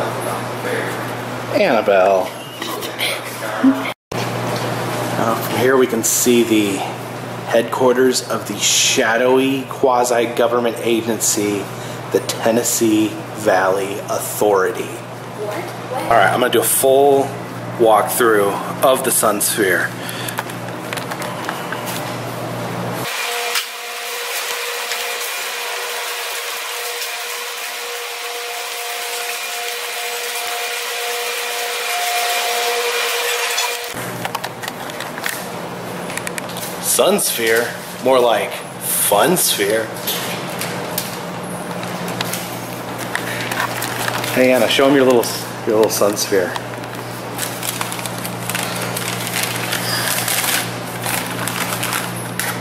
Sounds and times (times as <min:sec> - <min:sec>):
Speech: 0:05.2 - 0:19.9, 0:36.8 - 0:40.0, 0:44.3 - 0:46.6.